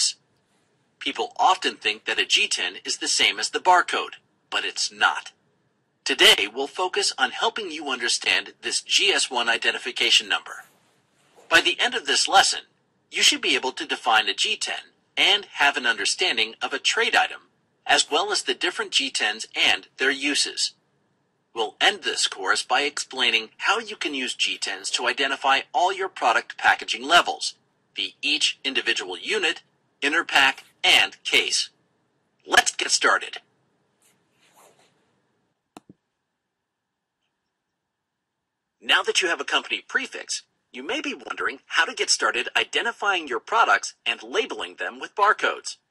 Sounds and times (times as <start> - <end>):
Speech: 1.0 - 5.4, 6.0 - 10.7, 11.4 - 20.8, 21.5 - 31.8, 32.4 - 33.5, 38.8 - 45.9.